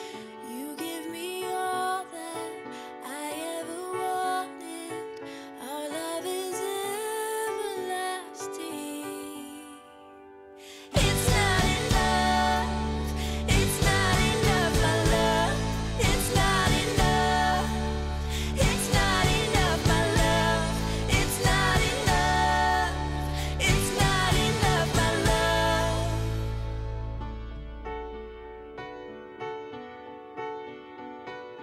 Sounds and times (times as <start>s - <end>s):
Music: 0.0s - 31.6s.